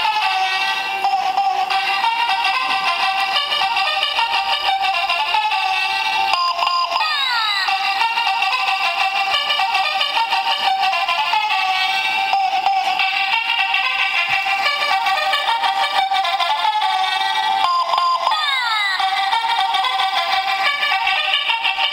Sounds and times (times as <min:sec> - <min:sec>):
Music: 0:00.0 - 0:21.9.